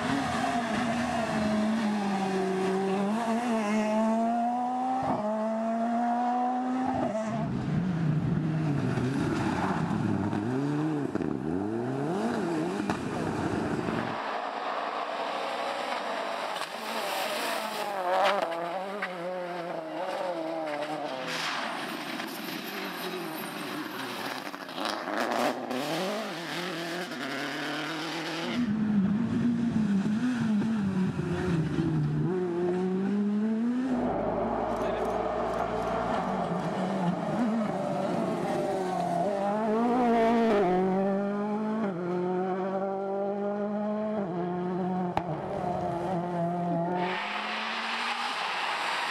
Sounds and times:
Accelerating, revving, vroom: 0.0 - 21.6, 23.0 - 49.1
Car: 0.0 - 49.1.

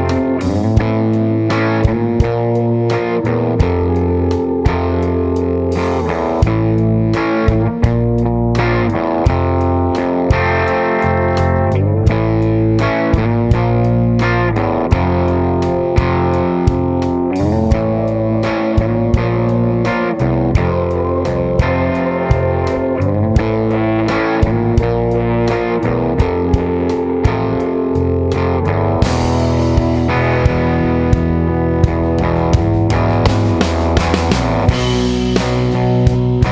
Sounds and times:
Music: 0.0 - 36.5.

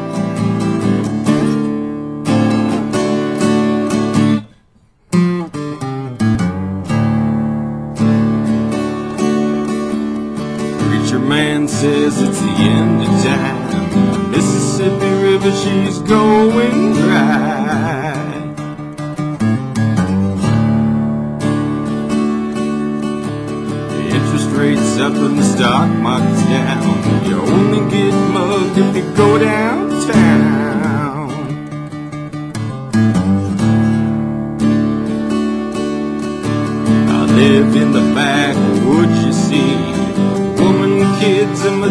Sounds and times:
Acoustic guitar: 0.0 - 41.9
Strum: 0.0 - 41.9.

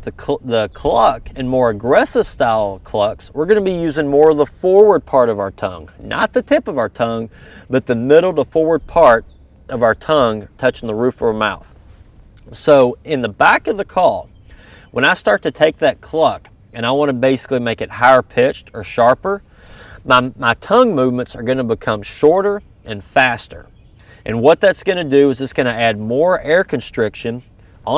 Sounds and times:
Speech: 0.0 - 11.7, 12.4 - 14.3, 14.9 - 19.4, 20.0 - 27.9.

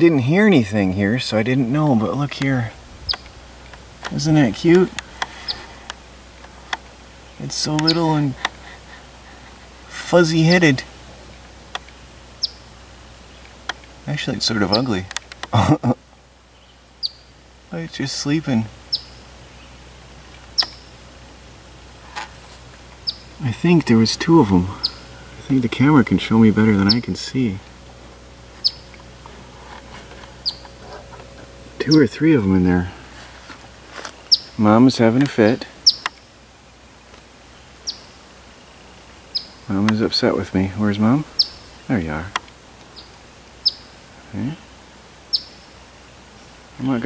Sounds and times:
Speech: 0.0 - 2.8, 4.1 - 5.0, 7.4 - 8.4, 9.9 - 10.9, 14.1 - 15.1, 17.7 - 18.7, 23.4 - 27.7, 31.8 - 33.0, 34.6 - 35.8, 39.7 - 41.3, 41.9 - 42.4, 44.3 - 44.6, 46.8 - 47.0
Outside, rural or natural: 0.0 - 47.0
Chirp, tweet: 12.4 - 12.6, 16.5 - 17.3, 18.9 - 19.7, 30.4 - 30.7, 37.8 - 38.2, 39.3 - 39.6, 41.4 - 41.8, 43.0 - 43.9, 45.3 - 45.6.

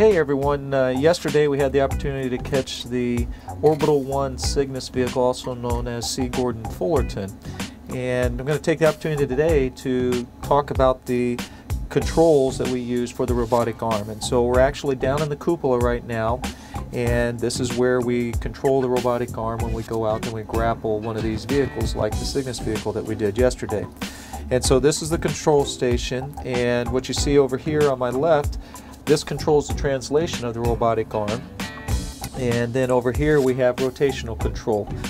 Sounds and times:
Speech: 0.0 - 16.4, 17.0 - 23.9, 24.5 - 31.4, 32.4 - 35.0
Music: 0.0 - 35.1.

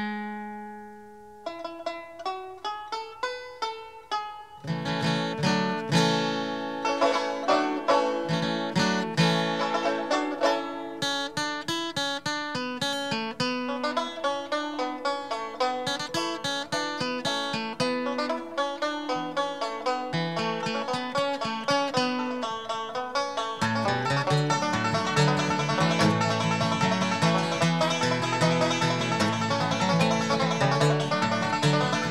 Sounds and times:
Banjo: 0.0 - 32.1.

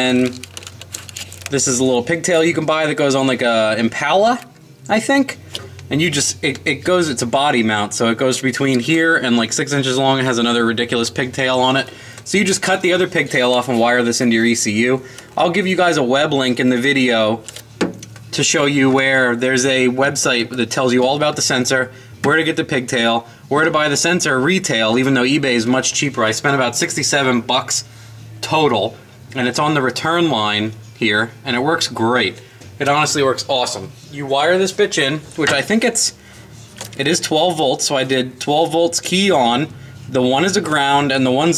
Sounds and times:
Speech: 0.0 - 0.4, 1.5 - 17.5, 18.3 - 36.2, 36.9 - 41.5.

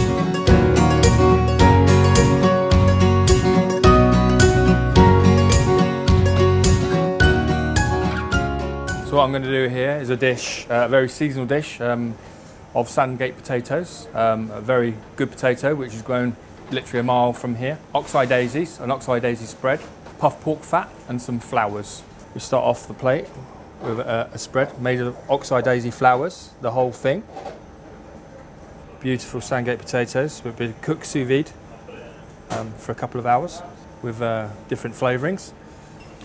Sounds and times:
Speech: 9.1 - 12.2, 12.8 - 27.3, 28.9 - 35.6.

